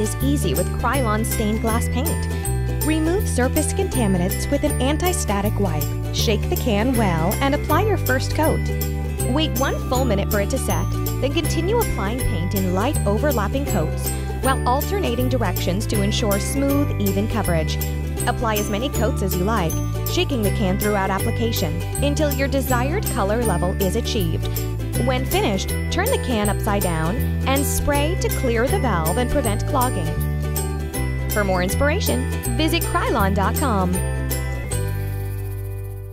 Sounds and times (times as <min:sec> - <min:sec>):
Speech: 0:00.0 - 0:02.2, 0:02.8 - 0:08.6, 0:09.3 - 0:24.4, 0:25.0 - 0:30.1, 0:31.4 - 0:34.0
Music: 0:00.0 - 0:36.1.